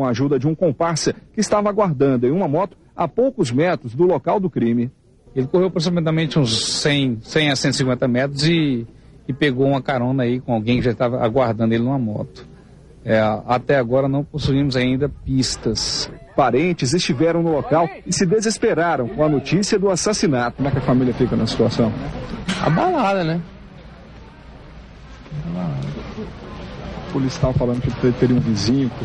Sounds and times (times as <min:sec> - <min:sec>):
Speech: 0:00.0 - 0:23.5, 0:25.3 - 0:29.0.